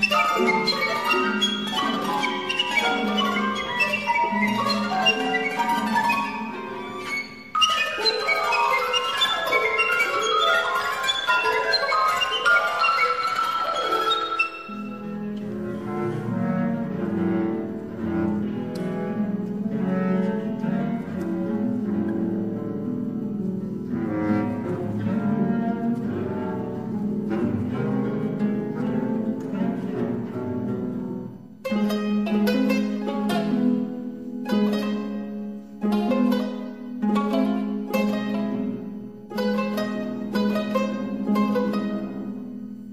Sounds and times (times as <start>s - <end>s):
Bowed string instrument: 0.0s - 42.9s.